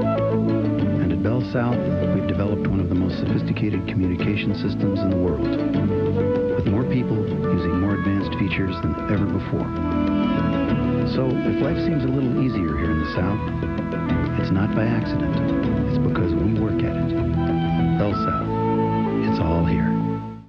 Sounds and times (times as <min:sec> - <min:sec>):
Music: 0:00.0 - 0:20.4
Speech: 0:01.0 - 0:05.6, 0:06.6 - 0:09.7, 0:11.0 - 0:13.5, 0:14.4 - 0:17.1, 0:18.0 - 0:18.5, 0:19.2 - 0:20.0.